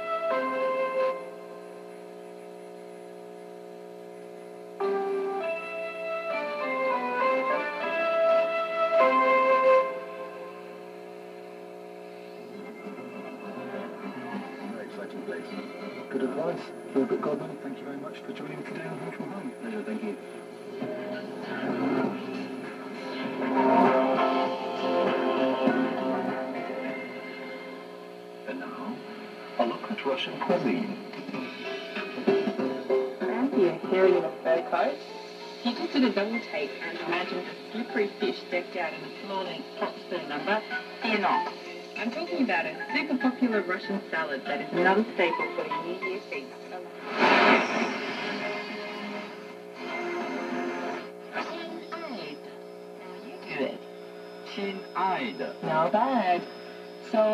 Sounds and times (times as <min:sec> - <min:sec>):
Radio: 0:10.7 - 0:57.3.